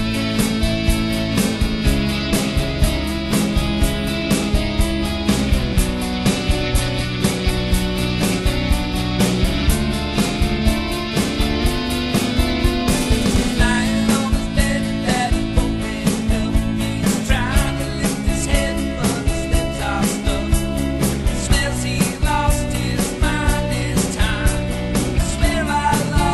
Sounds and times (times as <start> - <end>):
Music: 0.0 - 26.3.